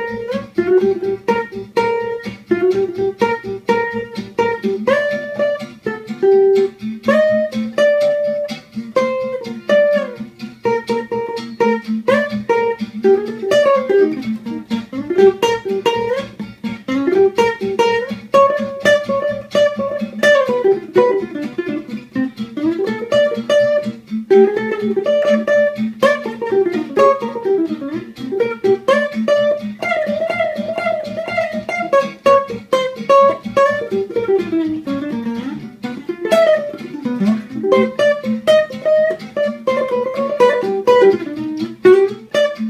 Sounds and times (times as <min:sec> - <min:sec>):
Soul music: 0:00.0 - 0:42.7.